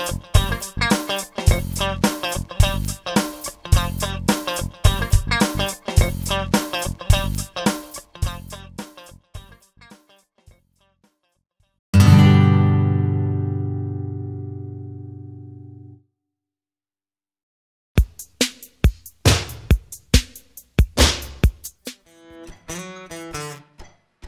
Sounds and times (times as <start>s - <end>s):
Strum: 12.0s - 15.9s.